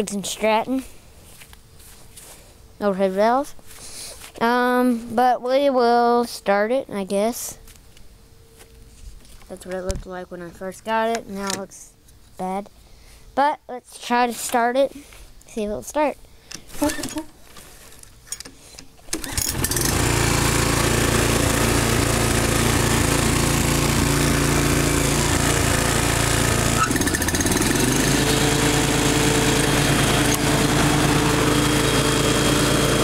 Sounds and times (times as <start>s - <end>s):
Speech: 0.0s - 0.9s, 2.8s - 3.6s, 4.4s - 7.6s, 9.5s - 12.7s, 13.4s - 16.2s
Outside, urban or manmade: 0.0s - 33.0s
Lawn mower: 19.0s - 33.0s.